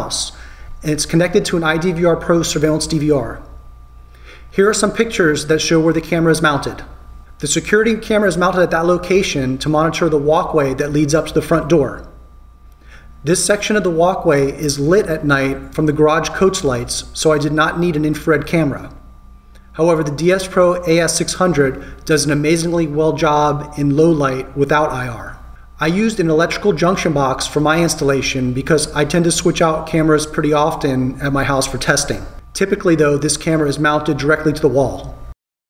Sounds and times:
Speech: 0.0s - 3.6s, 4.5s - 12.2s, 13.2s - 19.0s, 19.8s - 35.2s.

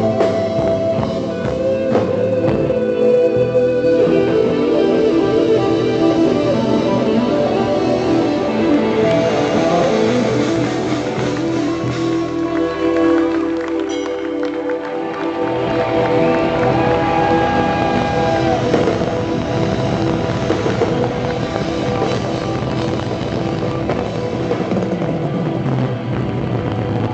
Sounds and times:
Heavy metal: 0.0s - 27.1s.

